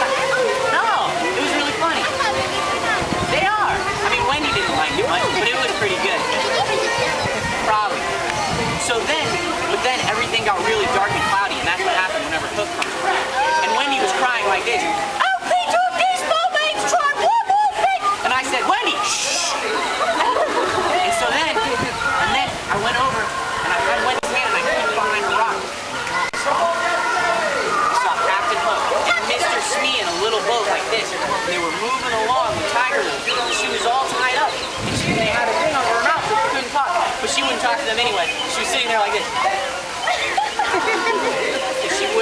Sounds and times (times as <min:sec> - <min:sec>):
Outside, urban or manmade: 0:00.0 - 0:42.2
Speech: 0:00.0 - 0:42.2.